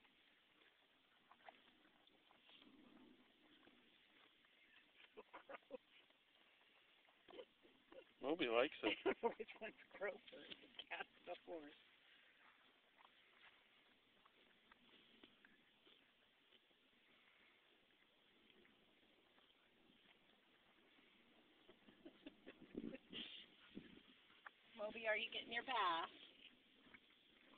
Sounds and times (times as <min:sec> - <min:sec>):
Speech: 0:24.8 - 0:26.1.